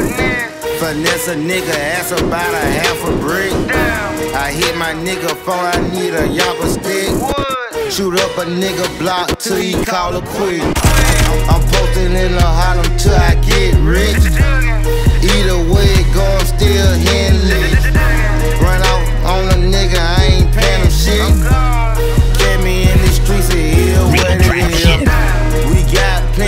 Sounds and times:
Music: 0.0s - 26.4s.

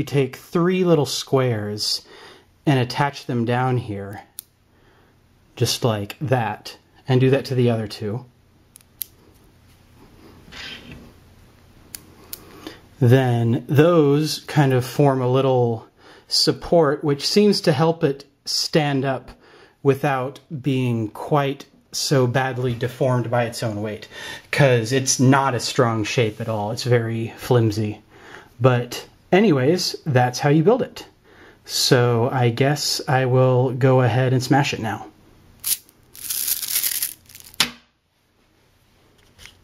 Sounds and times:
Speech: 0.0s - 4.3s, 5.6s - 8.3s, 13.0s - 35.2s
Inside, small room: 0.0s - 39.6s.

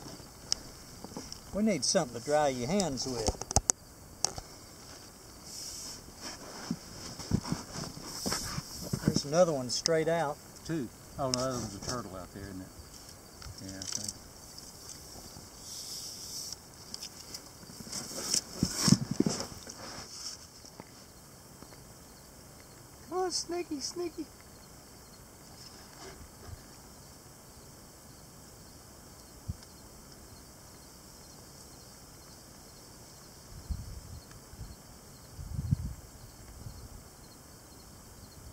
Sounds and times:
Outside, rural or natural: 0.0s - 38.5s
Snake: 0.0s - 38.5s.

